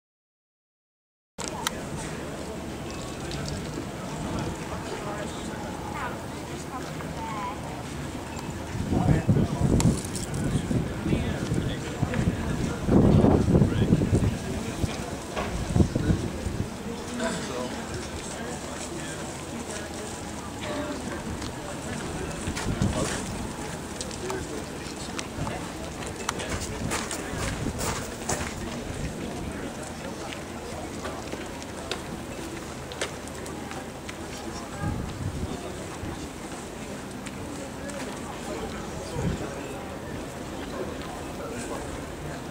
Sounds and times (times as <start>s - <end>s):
Speech: 1.4s - 42.5s.